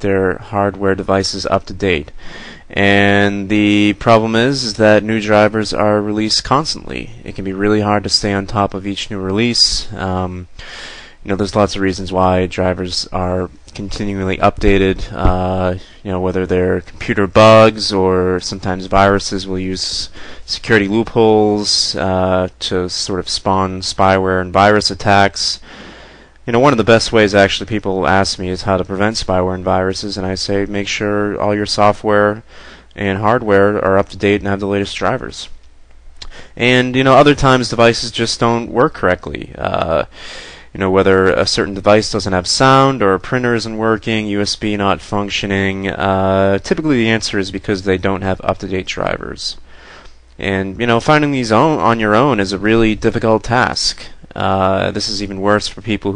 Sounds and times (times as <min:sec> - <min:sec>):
Speech: 0:00.0 - 0:10.6, 0:11.2 - 0:25.7, 0:26.4 - 0:35.6, 0:36.2 - 0:49.6, 0:50.4 - 0:56.1.